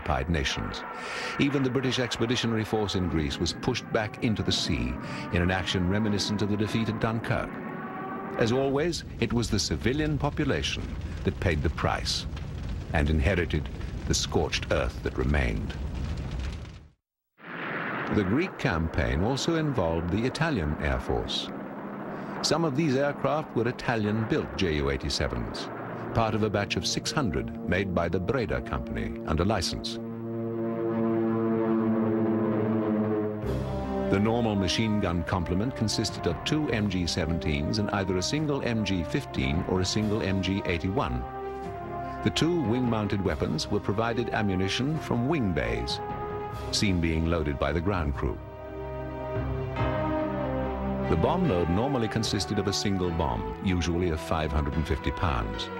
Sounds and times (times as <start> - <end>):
Speech: 0.0 - 0.8, 1.4 - 7.5, 8.4 - 12.3, 12.9 - 15.8, 18.1 - 21.5, 22.4 - 30.0, 34.1 - 41.2, 42.2 - 46.0, 46.7 - 48.4, 51.1 - 55.7.